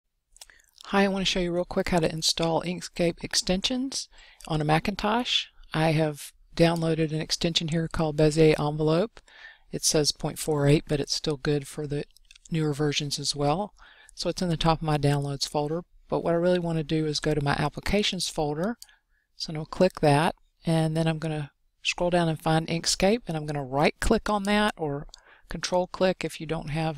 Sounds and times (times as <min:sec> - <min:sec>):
Narration, monologue: 0:00.1 - 0:26.9.